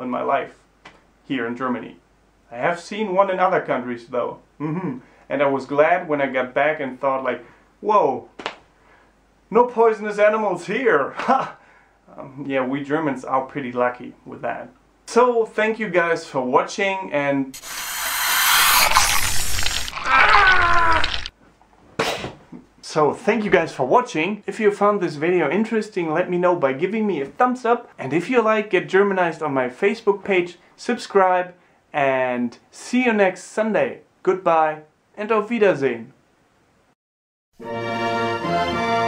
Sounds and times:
Speech: 0.0s - 0.6s, 1.2s - 8.4s, 9.5s - 17.6s, 22.8s - 36.2s
Inside, small room: 0.0s - 37.0s.

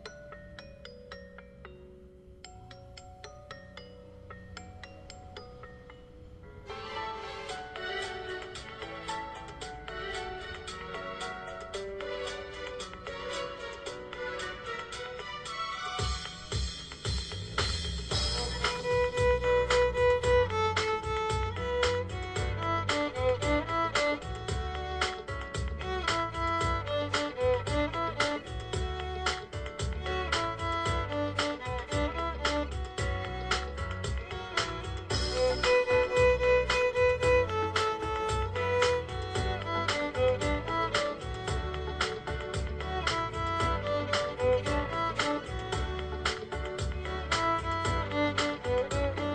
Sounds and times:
Violin, fiddle: 6.7s - 16.4s, 18.2s - 49.3s.

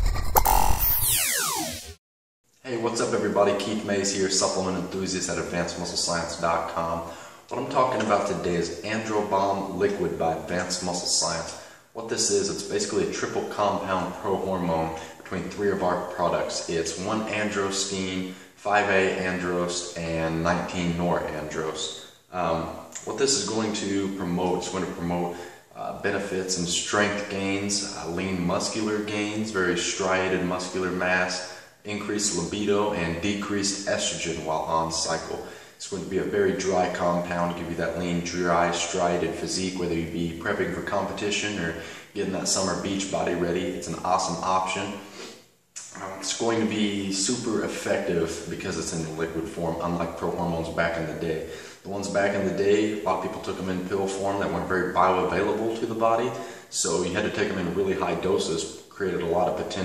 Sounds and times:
Speech: 2.6s - 45.2s, 45.8s - 59.8s.

